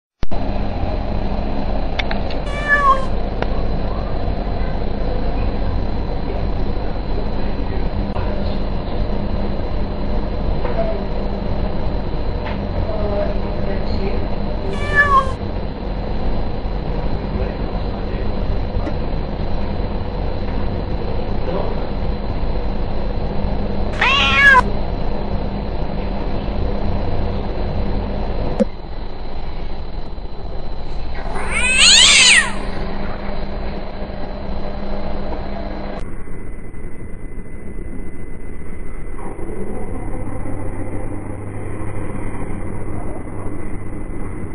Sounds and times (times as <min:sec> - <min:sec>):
Meow: 0:02.4 - 0:03.2, 0:14.7 - 0:15.4, 0:24.0 - 0:24.7, 0:31.1 - 0:32.8
Caterwaul: 0:02.5 - 0:03.2, 0:14.7 - 0:15.4, 0:24.0 - 0:24.7, 0:31.1 - 0:32.8.